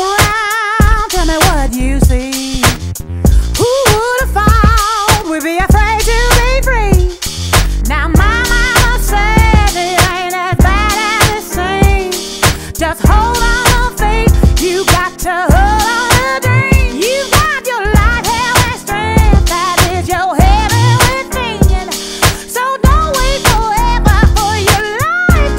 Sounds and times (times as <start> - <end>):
Music: 0.0 - 25.5.